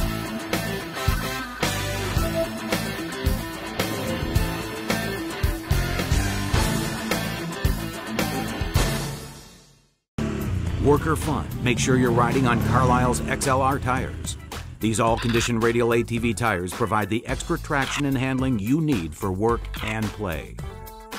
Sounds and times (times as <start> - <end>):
Music: 0.0 - 21.1
Speech: 10.8 - 20.7.